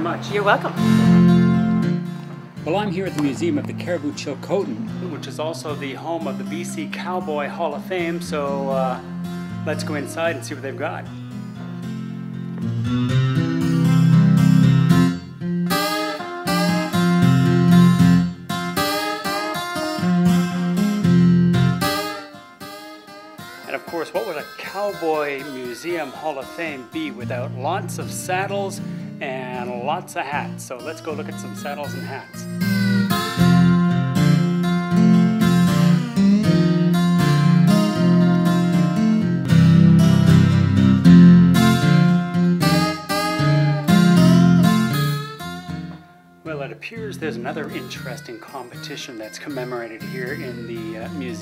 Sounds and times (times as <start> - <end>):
Speech: 0.0 - 0.8, 2.7 - 9.0, 9.7 - 11.1, 23.7 - 32.5, 46.5 - 51.4.